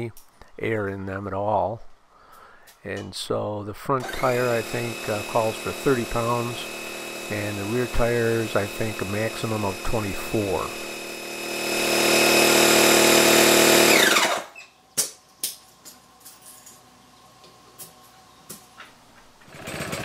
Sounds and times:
Speech: 0:00.0 - 0:01.9, 0:02.8 - 0:06.7, 0:07.3 - 0:10.8
Power tool: 0:04.0 - 0:14.6, 0:19.4 - 0:20.0.

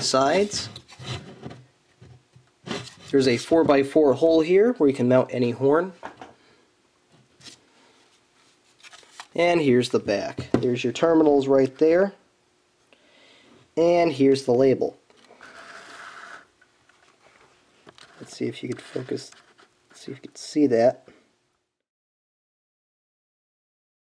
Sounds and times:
Speech: 0:00.0 - 0:00.8, 0:03.1 - 0:06.0, 0:09.4 - 0:12.2, 0:13.8 - 0:15.0, 0:18.2 - 0:19.4, 0:20.0 - 0:21.1.

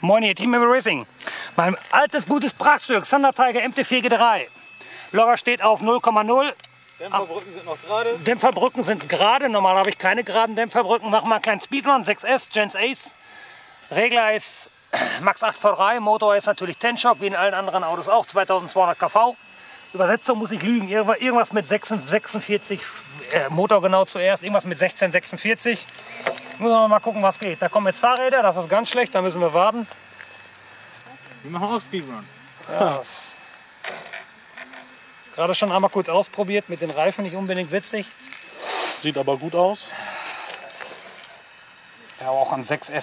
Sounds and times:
Speech: 0:00.0 - 0:04.5, 0:05.2 - 0:13.1, 0:13.9 - 0:19.4, 0:20.0 - 0:25.9, 0:26.6 - 0:29.9, 0:35.3 - 0:38.3.

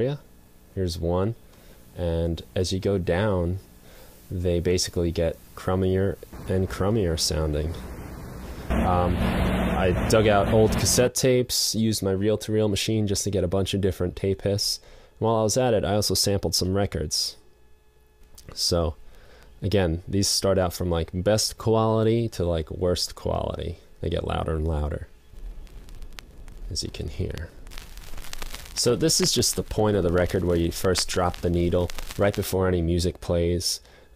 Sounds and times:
Speech: 0:00.0 - 0:00.2, 0:00.8 - 0:01.4, 0:02.0 - 0:03.7, 0:04.3 - 0:08.1, 0:08.7 - 0:17.4, 0:18.4 - 0:19.0, 0:19.6 - 0:25.1, 0:26.7 - 0:27.5, 0:28.8 - 0:33.9.

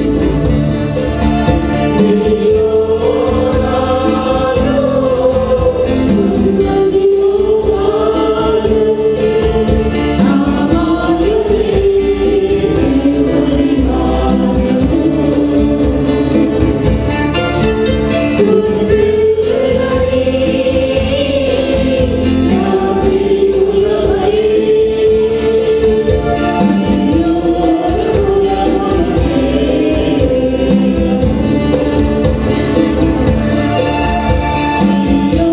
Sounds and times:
Choir: 0:00.0 - 0:35.5
Gospel music: 0:00.0 - 0:35.5.

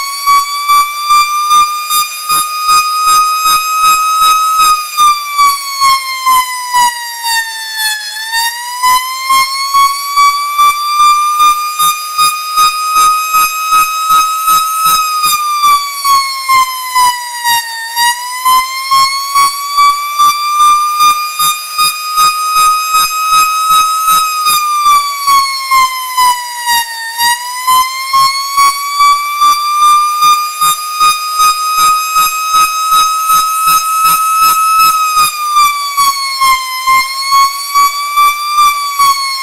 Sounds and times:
Siren: 0:00.0 - 0:39.4.

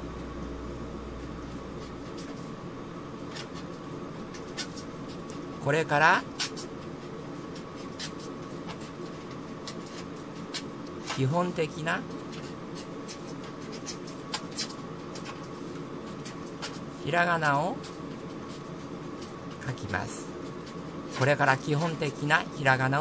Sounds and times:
Speech: 0:05.6 - 0:06.3, 0:11.1 - 0:12.0, 0:17.0 - 0:17.8, 0:19.6 - 0:20.3, 0:21.2 - 0:23.0
Writing: 0:07.5 - 0:10.7, 0:12.3 - 0:17.0.

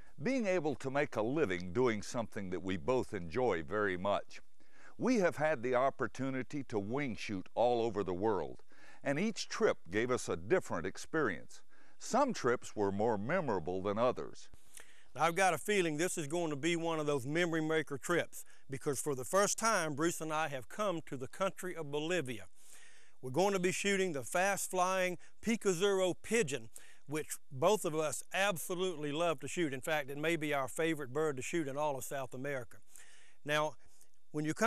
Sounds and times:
Speech: 0:00.2 - 0:04.4, 0:05.0 - 0:14.5, 0:15.2 - 0:22.5, 0:23.2 - 0:32.8, 0:33.4 - 0:33.8, 0:34.4 - 0:34.6.

